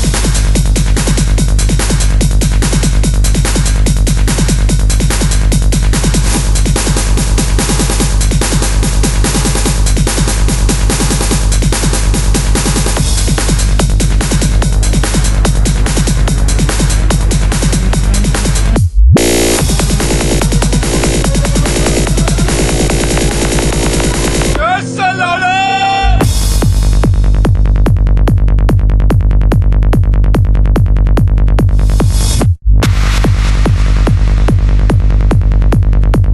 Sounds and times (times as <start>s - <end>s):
Music: 0.0s - 36.3s
Sound effect: 0.0s - 36.3s.